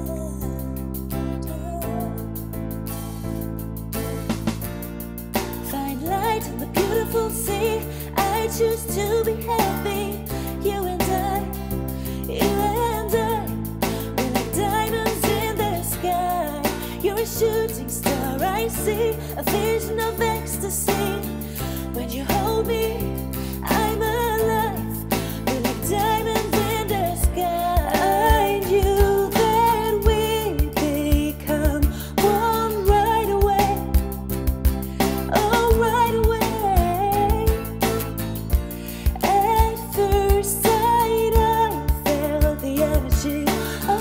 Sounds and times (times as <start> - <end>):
Music: 0.0 - 44.0.